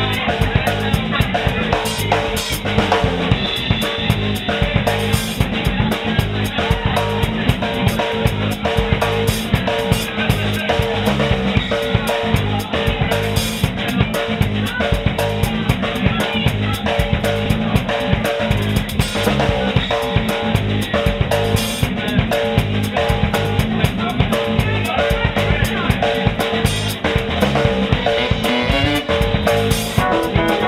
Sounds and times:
Psychedelic rock: 0:00.0 - 0:30.6
Ska: 0:00.0 - 0:30.6
Speech: 0:00.0 - 0:30.6.

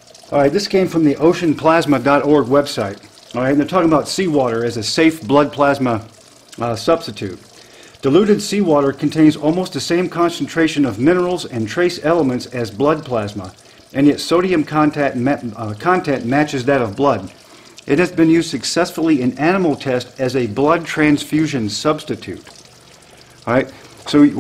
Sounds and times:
Stream: 0:00.0 - 0:24.4
Speech: 0:00.3 - 0:07.4, 0:08.0 - 0:22.5, 0:23.5 - 0:24.4.

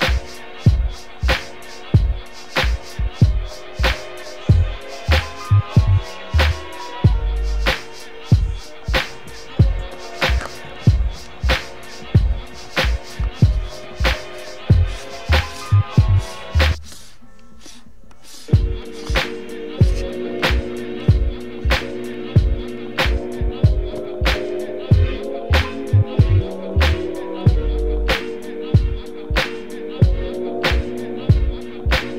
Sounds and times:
Inside, small room: 0:00.0 - 0:32.1
Music: 0:00.0 - 0:32.1.

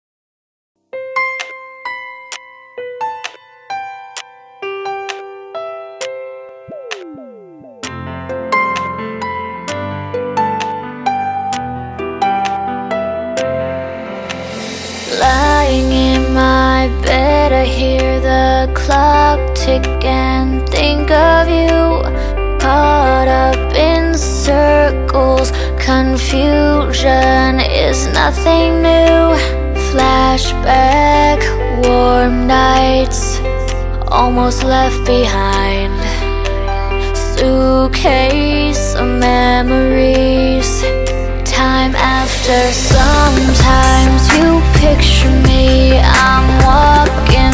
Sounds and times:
Electric piano: 0:01.0 - 0:47.5
Pop music: 0:06.0 - 0:47.5.

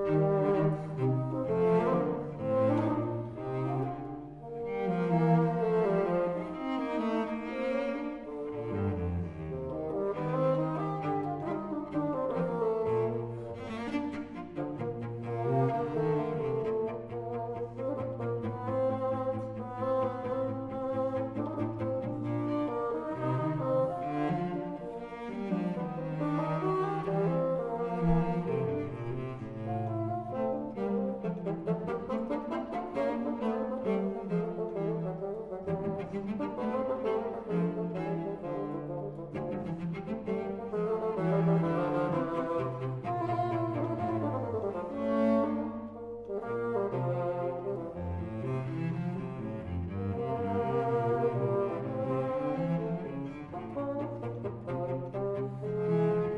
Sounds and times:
Cello: 0:00.0 - 0:56.3.

